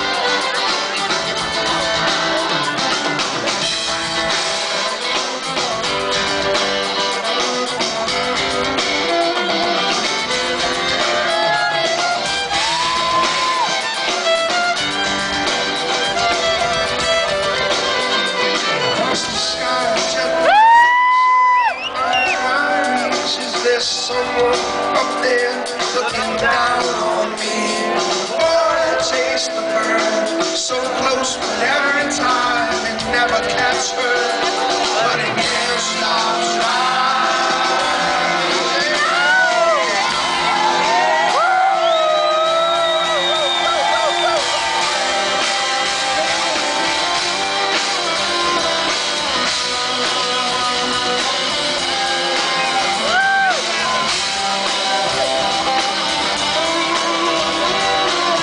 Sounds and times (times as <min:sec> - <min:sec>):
Crowd: 0:00.0 - 0:58.4
Guitar: 0:00.0 - 0:58.4
Cheering: 0:10.8 - 0:15.7, 0:20.0 - 0:23.8, 0:33.6 - 0:48.6, 0:49.2 - 0:58.4.